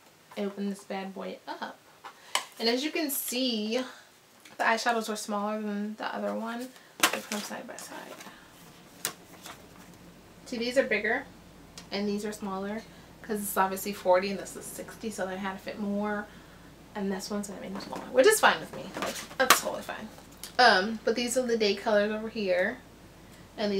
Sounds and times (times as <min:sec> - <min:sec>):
Speech: 0:00.4 - 0:01.8, 0:02.6 - 0:04.0, 0:04.6 - 0:08.2, 0:10.5 - 0:11.3, 0:11.9 - 0:16.3, 0:17.0 - 0:22.8, 0:23.6 - 0:23.7.